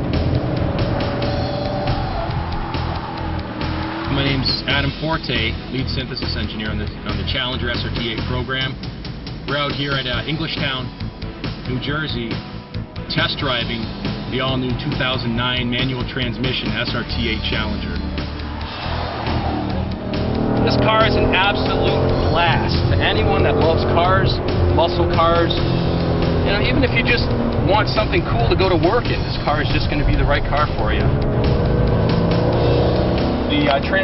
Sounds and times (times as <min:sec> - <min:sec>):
Music: 0:00.0 - 0:34.0
Speech: 0:04.1 - 0:08.8, 0:09.5 - 0:10.9, 0:11.7 - 0:12.4, 0:13.1 - 0:18.0, 0:20.7 - 0:25.6, 0:26.5 - 0:31.1, 0:33.5 - 0:34.0.